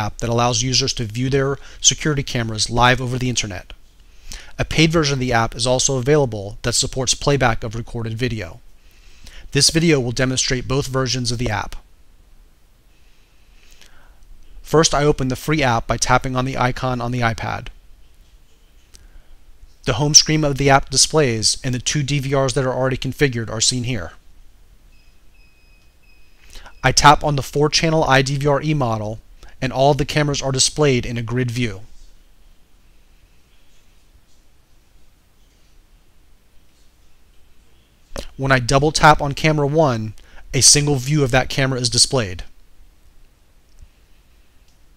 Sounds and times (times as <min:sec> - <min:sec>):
Speech: 0:00.0 - 0:03.8, 0:04.6 - 0:08.6, 0:09.5 - 0:11.9, 0:14.6 - 0:17.8, 0:19.9 - 0:24.2, 0:26.8 - 0:32.0, 0:38.2 - 0:42.6.